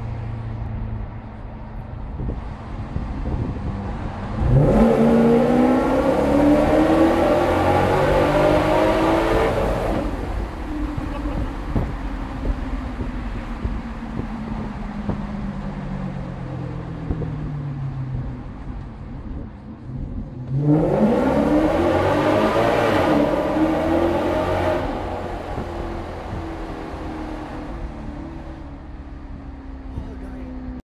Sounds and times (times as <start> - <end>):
Speech: 29.9 - 30.8.